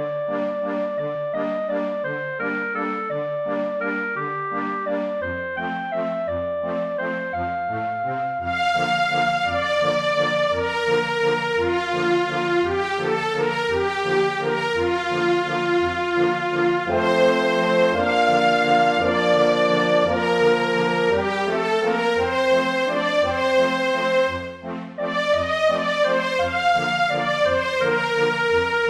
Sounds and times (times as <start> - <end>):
Music: 0.0 - 28.8.